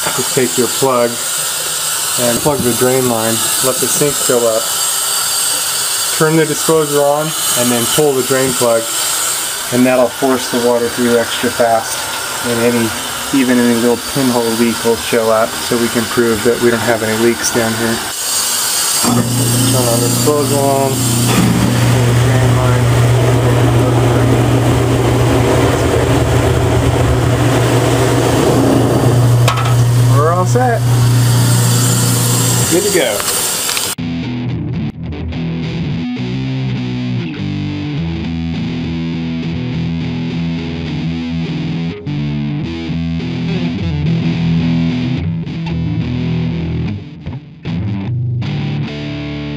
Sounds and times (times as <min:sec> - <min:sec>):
Speech: 0:00.0 - 0:01.2, 0:02.2 - 0:04.7, 0:06.2 - 0:09.0, 0:09.7 - 0:18.1, 0:19.1 - 0:21.0, 0:22.0 - 0:24.6, 0:30.1 - 0:30.9, 0:32.6 - 0:33.3
Sink (filling or washing): 0:00.0 - 0:22.8, 0:29.4 - 0:34.0
Music: 0:34.0 - 0:49.5.